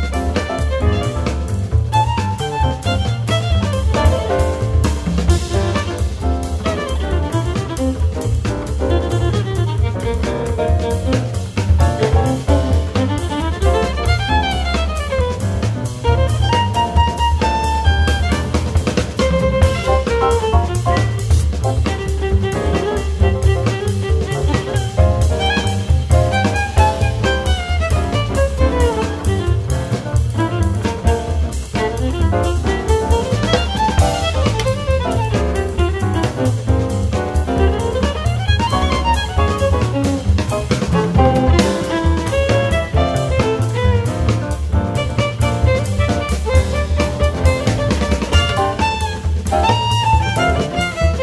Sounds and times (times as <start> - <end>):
Violin, fiddle: 0.0 - 5.1, 5.7 - 51.2.